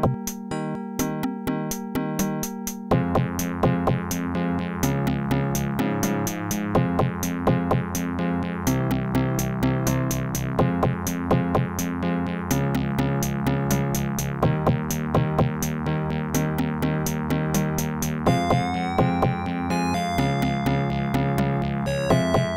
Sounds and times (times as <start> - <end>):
Video game music: 0.0 - 22.5.